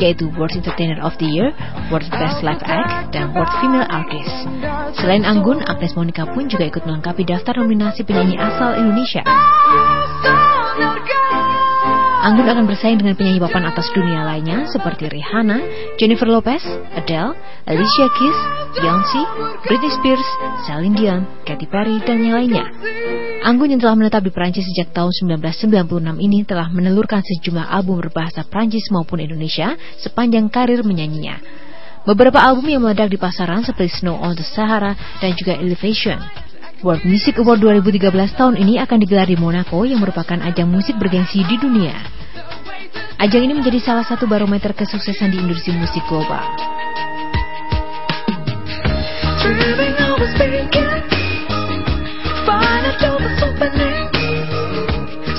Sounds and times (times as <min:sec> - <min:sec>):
Speech: 0:00.0 - 0:09.3, 0:12.2 - 0:22.7, 0:23.4 - 0:31.4, 0:32.1 - 0:42.1, 0:43.2 - 0:46.6
Music: 0:00.0 - 0:55.3.